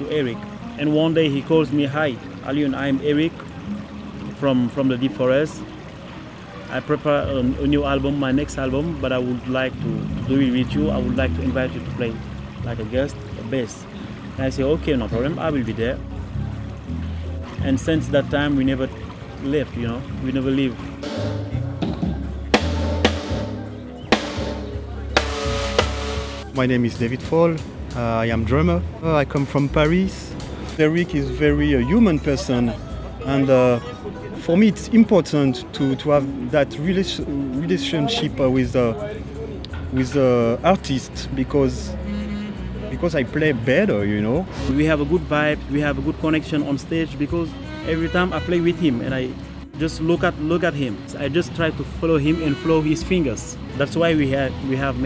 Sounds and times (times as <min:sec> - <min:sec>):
Music: 0:00.0 - 0:55.0
Speech: 0:06.6 - 0:13.8, 0:14.4 - 0:16.0, 0:17.6 - 0:20.8, 0:26.5 - 0:39.2, 0:39.9 - 0:41.9, 0:42.9 - 0:55.0.